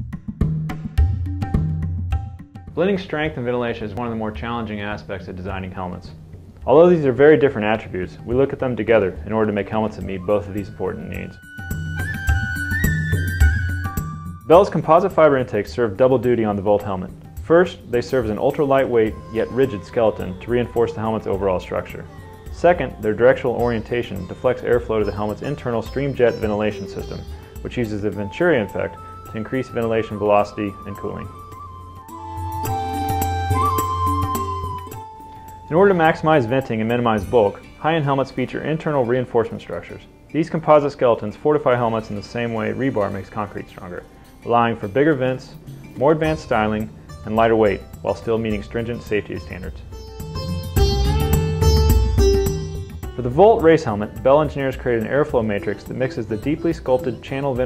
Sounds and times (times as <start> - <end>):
Music: 0.0 - 57.6
Speech: 2.8 - 11.4, 14.5 - 31.3, 35.7 - 49.8, 53.2 - 57.6.